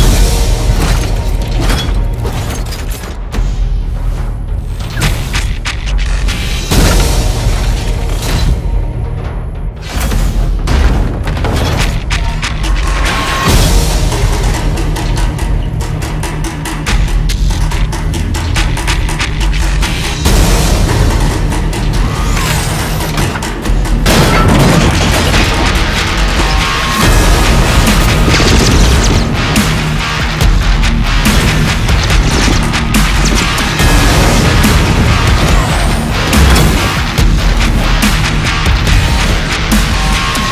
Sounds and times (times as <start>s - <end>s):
Music: 0.0s - 40.5s.